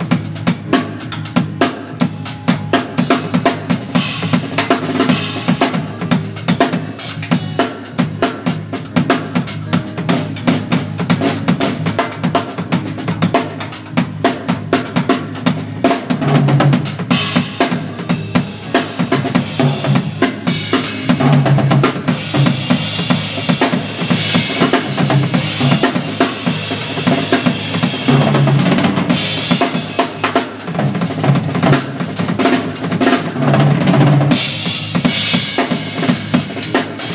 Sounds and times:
Bass drum: 0.0 - 37.1
Drum kit: 0.0 - 37.1.

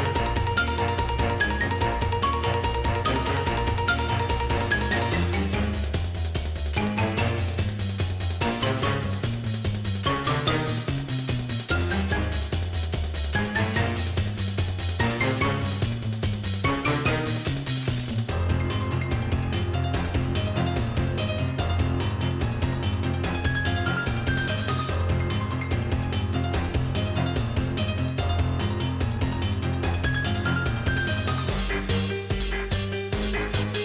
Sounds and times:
Music: 0.0 - 33.8.

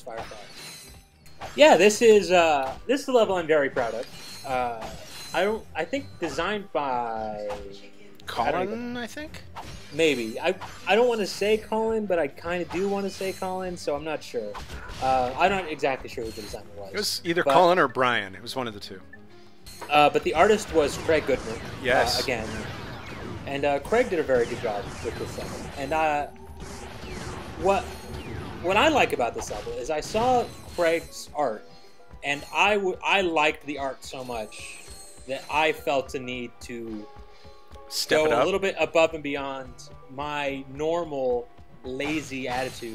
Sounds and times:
Speech: 10.0 - 19.0, 19.9 - 22.6, 28.7 - 31.6, 37.9 - 42.9.

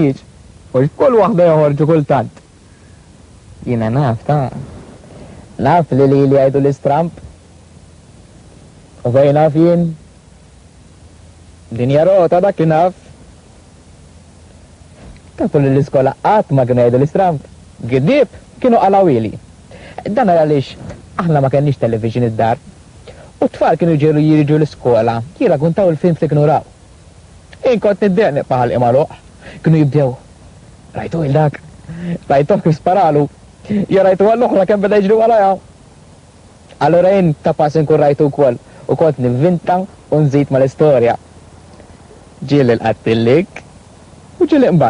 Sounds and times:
Speech: 0.0 - 2.4, 5.6 - 7.3, 9.0 - 10.0, 11.7 - 13.1, 15.4 - 19.4, 20.0 - 22.6, 23.4 - 26.7, 27.6 - 30.3, 30.9 - 35.7, 36.7 - 41.2, 42.4 - 43.7, 44.4 - 44.9.

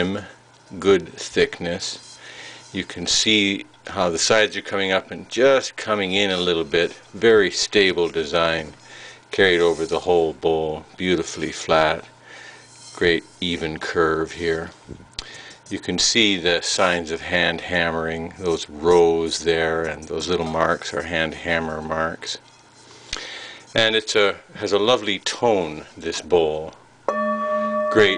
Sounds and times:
Speech: 0.0 - 2.1, 2.7 - 12.1, 13.0 - 14.8, 15.7 - 22.4, 23.7 - 26.8, 27.9 - 28.1.

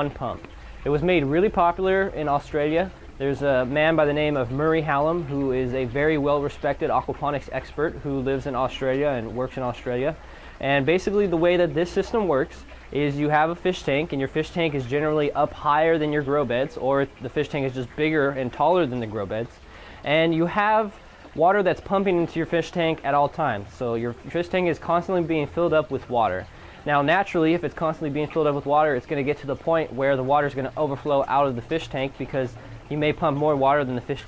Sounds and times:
Speech: 0.0 - 34.2.

